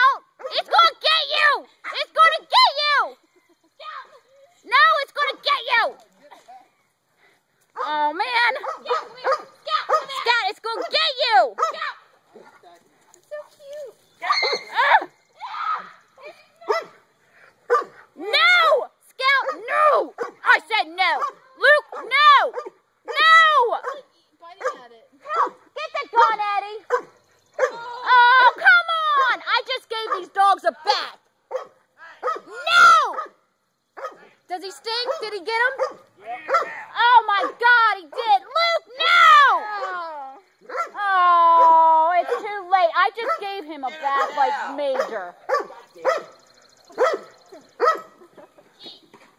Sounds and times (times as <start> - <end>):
Outside, rural or natural: 0.0 - 49.3.